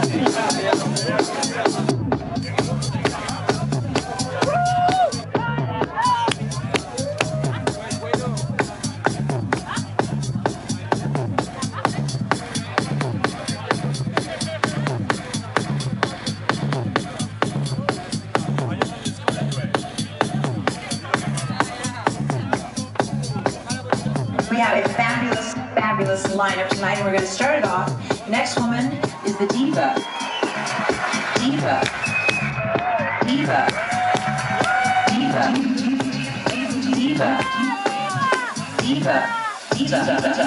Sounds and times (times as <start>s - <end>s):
Music: 0.0s - 40.4s
Speech: 9.6s - 15.8s, 17.0s - 30.0s.